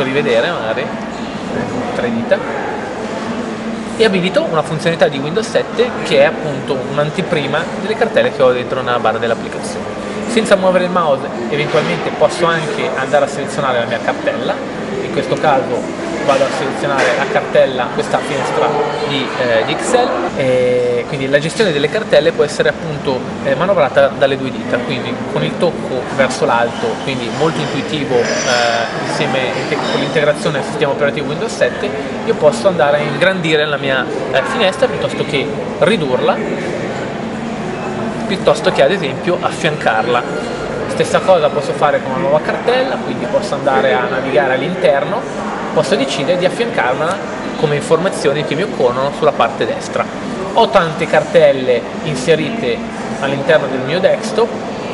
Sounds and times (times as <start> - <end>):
Speech: 0.0 - 2.6, 4.0 - 36.8, 38.2 - 54.9.